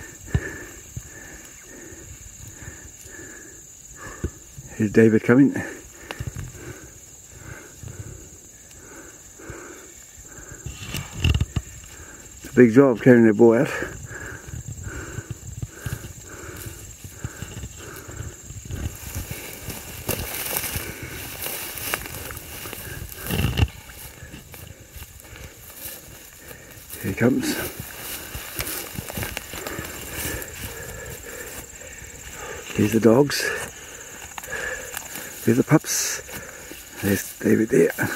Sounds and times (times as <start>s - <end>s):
Speech: 4.7s - 5.8s, 12.5s - 13.9s, 27.0s - 27.7s, 32.8s - 33.7s, 35.4s - 36.2s, 37.0s - 38.1s.